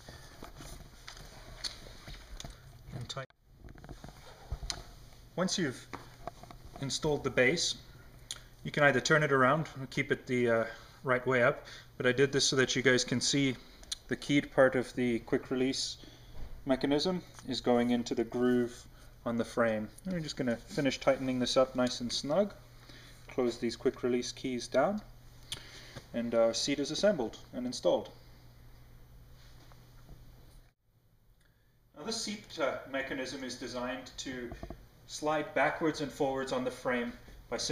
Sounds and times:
Speech: 5.4 - 5.9, 6.8 - 7.8, 8.6 - 16.0, 16.7 - 22.6, 23.3 - 25.1, 26.1 - 28.1, 32.0 - 37.7.

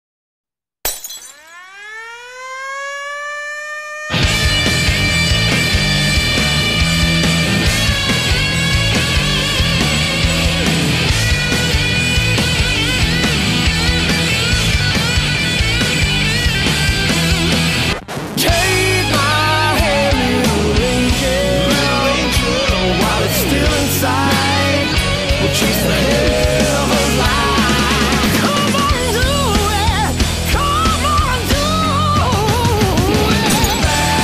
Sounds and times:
Breaking: 0.8 - 1.8, 33.4 - 34.2
Music: 4.2 - 34.2.

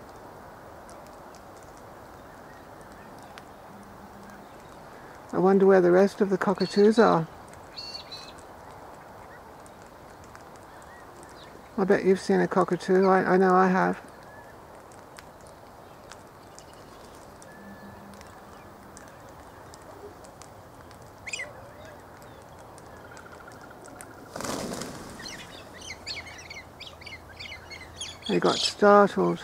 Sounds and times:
Outside, rural or natural: 0.0 - 29.4
Speech: 5.3 - 7.3, 11.8 - 14.0, 28.3 - 29.4
Bird: 6.4 - 13.4, 14.0 - 29.4.

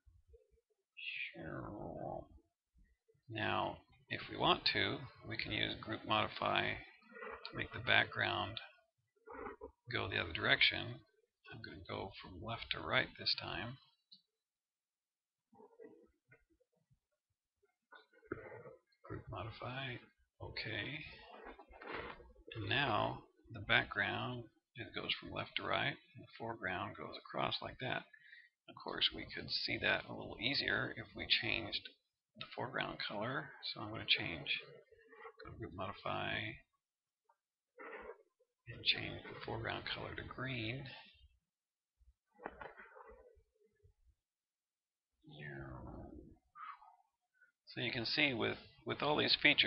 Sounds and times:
Speech: 1.0 - 2.4, 3.3 - 8.8, 9.9 - 14.0, 19.1 - 21.4, 22.5 - 34.7, 35.4 - 36.7, 38.7 - 41.2, 45.2 - 46.4, 47.7 - 49.6.

